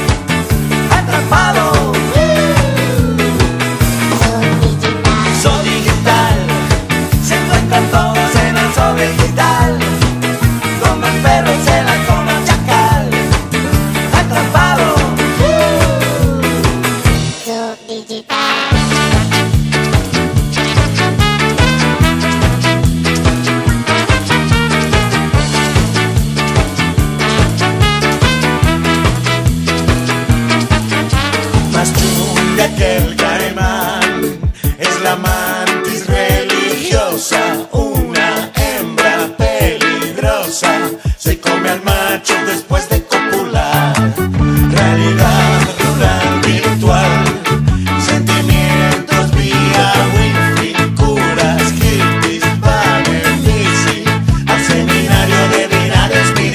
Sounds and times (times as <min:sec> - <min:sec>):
Reggae: 0:00.0 - 0:56.5
Ska: 0:00.0 - 0:56.5.